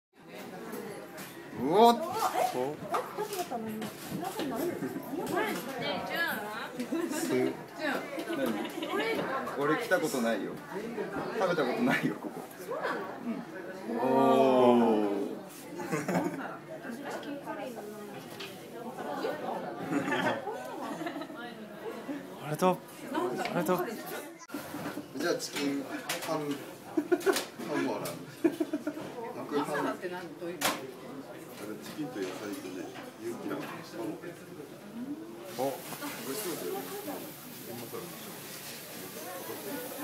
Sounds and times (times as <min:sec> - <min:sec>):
Chatter: 0:00.2 - 0:40.0
Inside, large room or hall: 0:00.2 - 0:40.0.